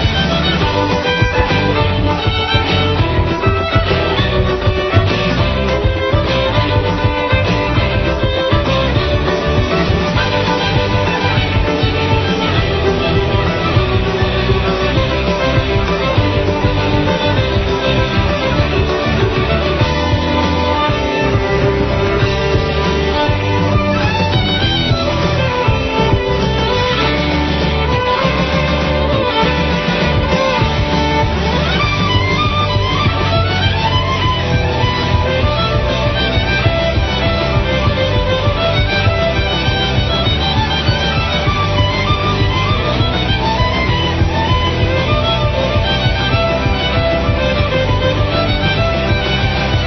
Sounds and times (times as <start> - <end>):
Music: 0.0 - 49.8.